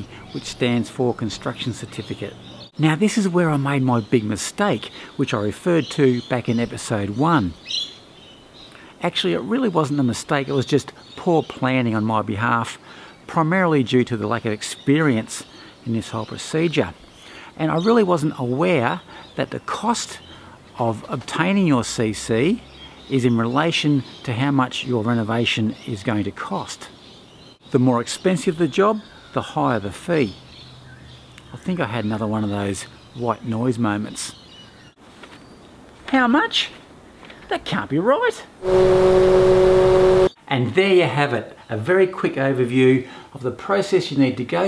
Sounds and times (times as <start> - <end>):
Speech: 0.0 - 7.6, 9.0 - 17.0, 17.6 - 20.2, 20.8 - 27.0, 27.7 - 30.4, 31.5 - 34.4, 36.0 - 36.8, 37.5 - 38.6, 40.4 - 44.6
Environmental noise: 0.0 - 44.6.